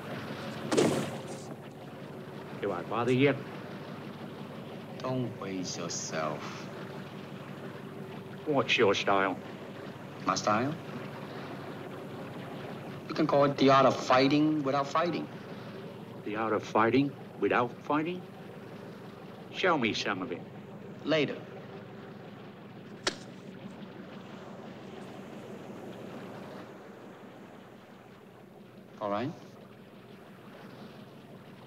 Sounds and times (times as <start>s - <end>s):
Speech: 2.6s - 3.4s, 5.0s - 6.7s, 8.4s - 9.4s, 10.2s - 10.8s, 13.1s - 15.3s, 16.2s - 18.2s, 19.5s - 21.4s, 29.0s - 29.5s.